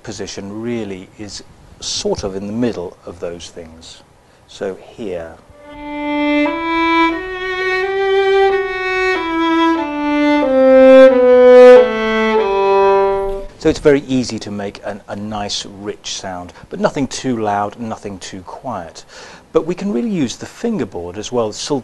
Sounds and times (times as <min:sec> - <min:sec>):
Speech: 0:00.0 - 0:05.4, 0:13.6 - 0:21.8
Violin, fiddle: 0:05.5 - 0:13.5.